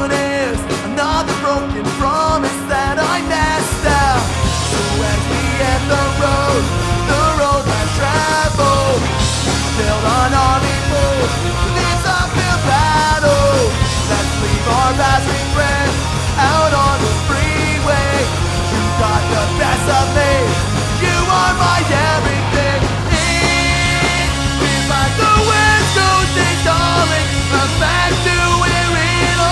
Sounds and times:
Psychedelic rock: 0.0s - 29.5s.

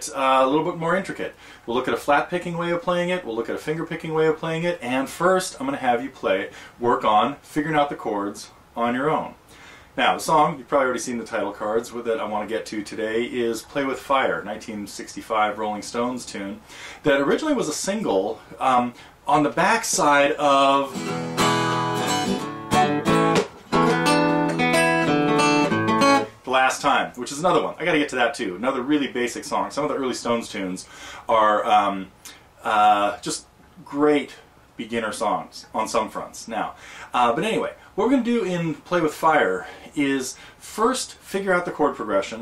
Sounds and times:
Speech: 0.0s - 9.4s, 10.0s - 21.0s, 26.4s - 42.4s.

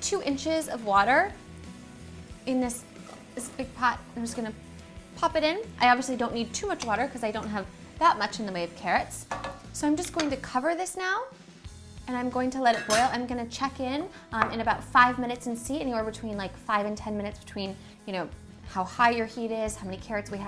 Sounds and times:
Female speech, woman speaking: 0.0s - 1.4s, 2.5s - 2.8s, 3.4s - 4.6s, 5.2s - 9.2s, 9.8s - 11.3s, 12.1s - 20.4s.

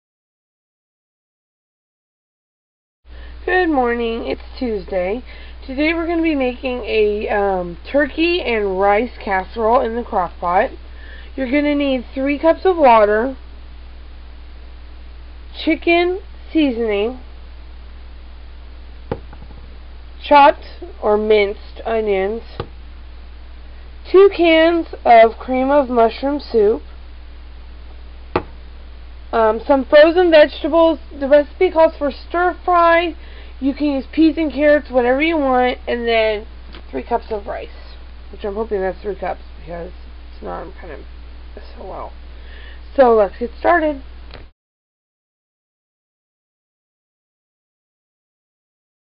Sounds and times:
Speech: 3.4s - 13.4s, 15.6s - 17.2s, 20.2s - 22.6s, 24.1s - 26.8s, 29.4s - 42.2s, 42.8s - 44.1s.

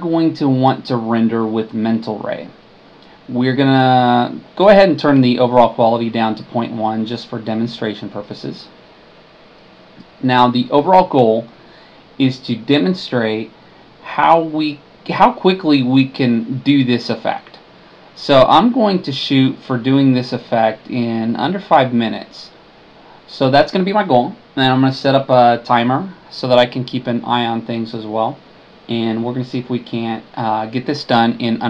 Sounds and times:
Speech: 0.0s - 2.6s, 3.3s - 8.8s, 10.0s - 11.5s, 12.2s - 22.6s, 23.3s - 31.6s.

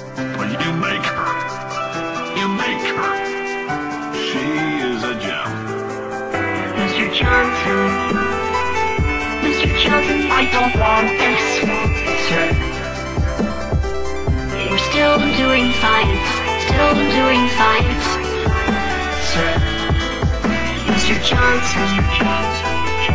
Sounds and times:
Jazz: 0.0s - 23.1s.

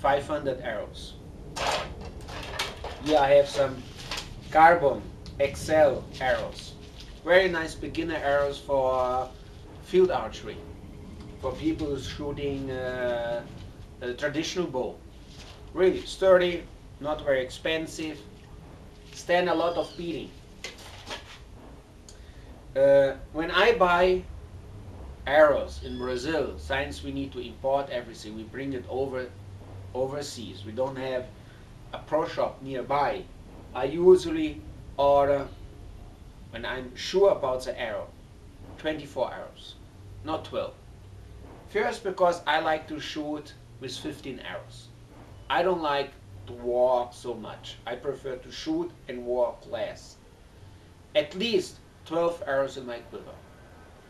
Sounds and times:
Speech: 0.0s - 1.2s, 3.0s - 3.8s, 4.5s - 10.6s, 11.4s - 15.0s, 15.7s - 18.2s, 19.2s - 20.4s, 22.7s - 24.3s, 25.3s - 29.4s, 30.0s - 31.3s, 31.9s - 35.6s, 36.5s - 38.2s, 38.8s - 40.8s, 41.7s - 44.9s, 45.5s - 50.2s, 51.2s - 53.4s.

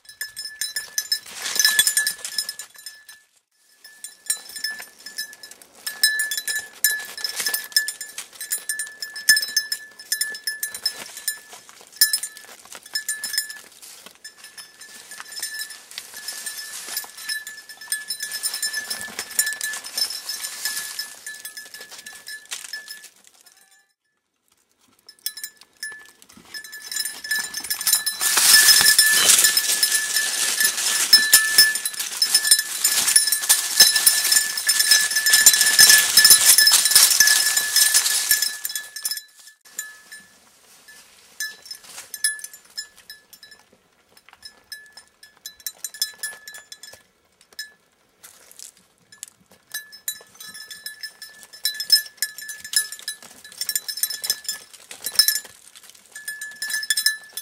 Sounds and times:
Goat: 0.1s - 57.4s.

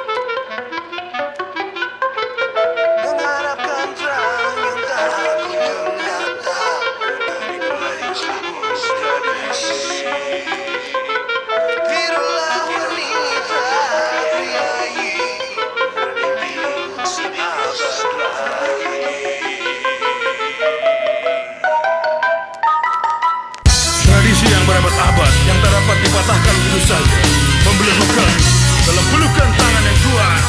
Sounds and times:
Music: 0.0s - 30.4s.

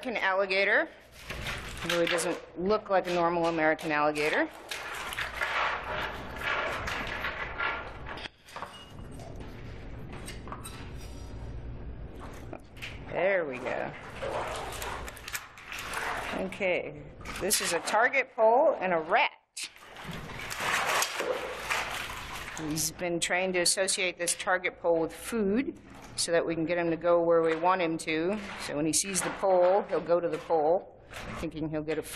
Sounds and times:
Speech: 0.0s - 1.0s, 1.8s - 4.5s, 13.1s - 14.0s, 16.3s - 19.7s, 22.6s - 32.1s.

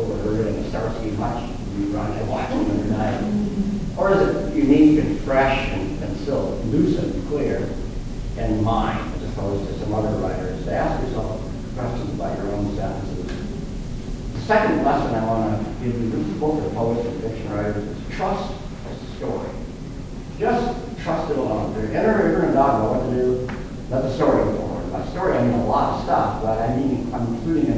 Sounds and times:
Speech: 0.0s - 7.8s, 8.4s - 13.5s, 14.4s - 19.7s, 20.4s - 27.7s.

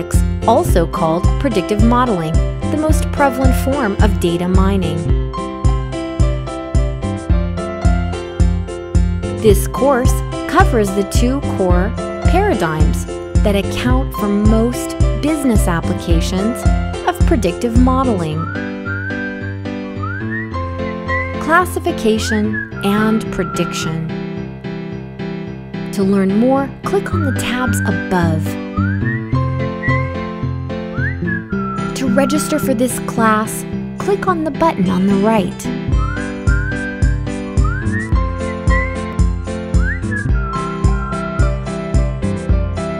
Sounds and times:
Speech: 0.0s - 5.1s, 9.4s - 18.5s, 21.4s - 24.1s, 26.0s - 28.6s, 32.0s - 35.7s
Music: 0.0s - 42.9s.

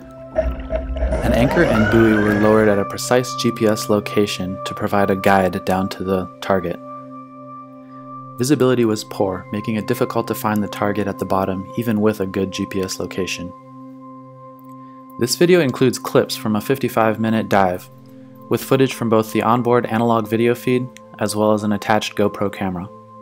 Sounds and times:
Music: 0.0s - 23.2s
Speech: 1.2s - 6.8s, 8.4s - 13.6s, 15.2s - 17.9s, 18.5s - 22.9s.

